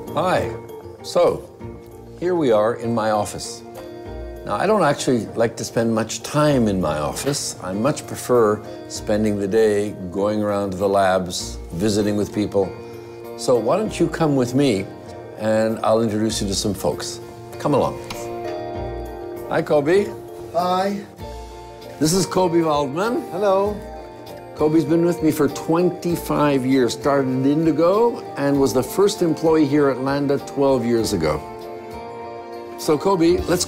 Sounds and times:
Music: 0.0 - 33.6
Speech: 0.2 - 1.5, 2.2 - 3.6, 4.4 - 12.7, 13.4 - 18.2, 19.5 - 21.1, 22.0 - 23.8, 24.6 - 31.4, 32.8 - 33.6.

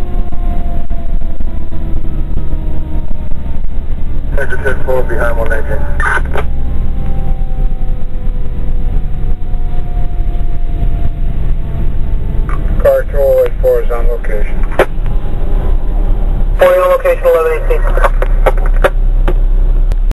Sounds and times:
Speech: 4.3 - 6.3, 12.8 - 14.6, 16.6 - 18.2.

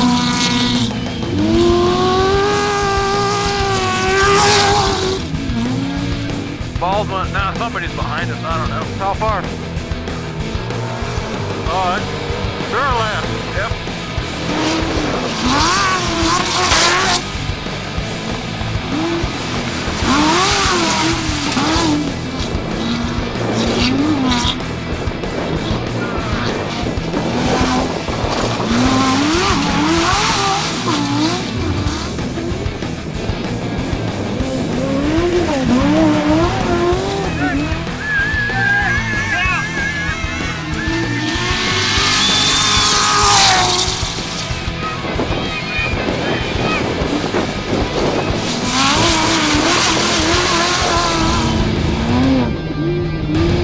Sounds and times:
Music: 0.0 - 53.6
Truck: 0.0 - 53.6
Speech: 6.8 - 9.5, 11.6 - 13.8.

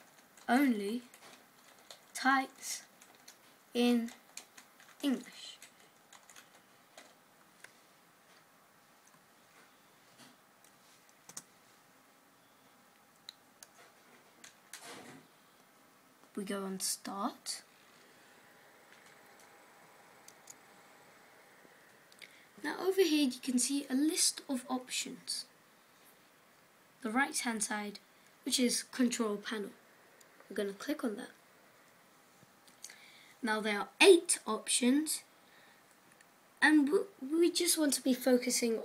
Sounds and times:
Speech: 0.5 - 1.1, 2.2 - 2.9, 3.8 - 4.2, 5.0 - 5.6, 16.4 - 17.7, 22.6 - 25.5, 27.0 - 29.8, 30.5 - 31.4, 33.4 - 35.3, 36.6 - 38.8.

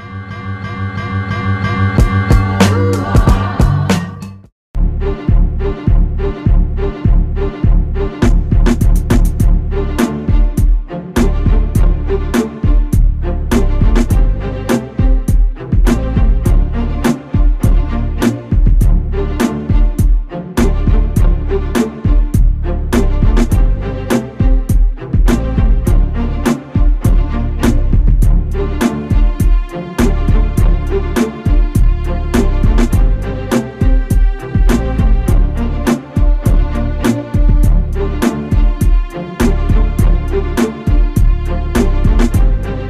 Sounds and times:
Music: 0.0 - 42.9.

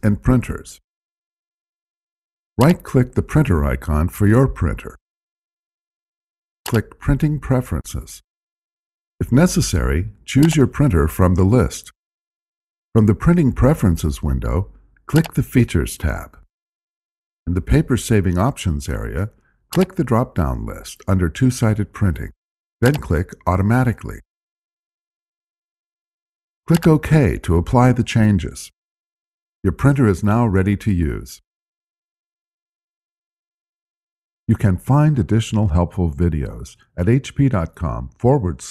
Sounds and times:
Speech: 0.0 - 0.8, 2.6 - 5.0, 6.7 - 8.3, 9.2 - 12.0, 13.0 - 16.5, 17.5 - 24.3, 26.7 - 28.8, 29.7 - 31.5, 34.5 - 38.7.

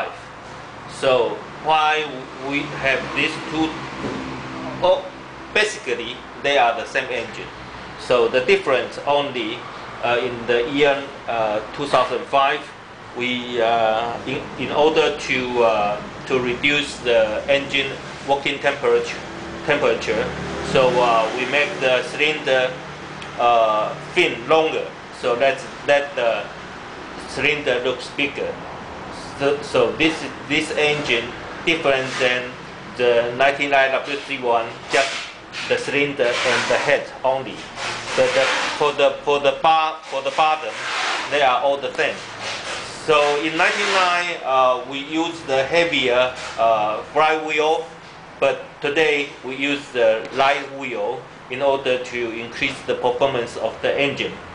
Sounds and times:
Speech: 0.0 - 0.3, 0.9 - 3.8, 4.7 - 22.8, 23.4 - 26.6, 27.2 - 42.2, 42.8 - 54.4.

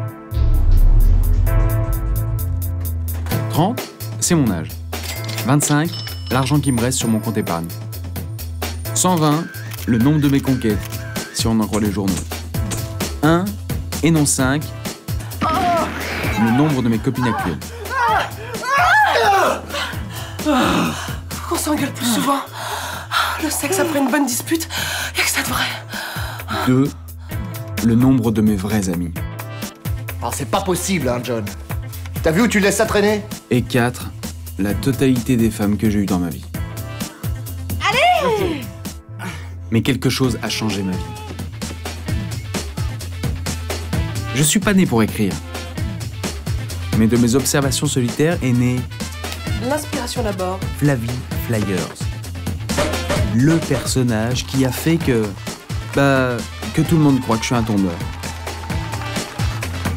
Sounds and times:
Music: 0.0 - 59.9.

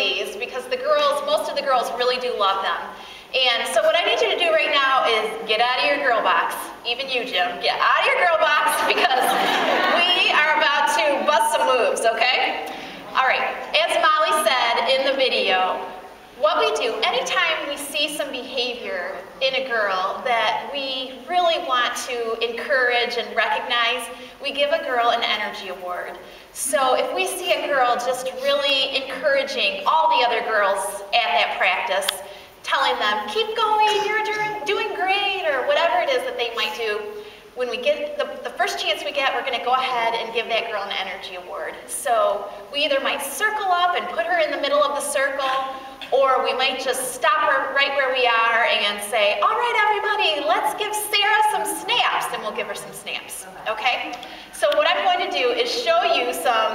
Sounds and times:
Speech: 0.0 - 56.7.

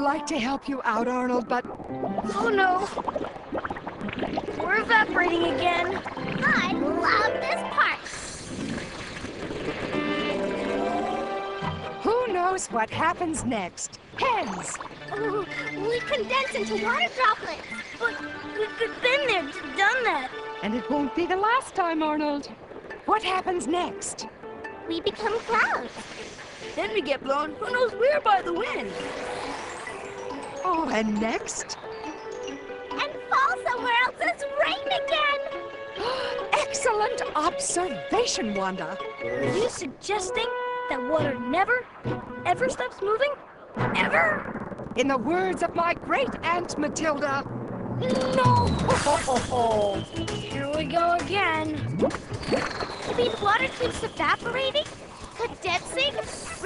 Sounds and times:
Music: 0.0 - 8.2, 9.5 - 56.6.

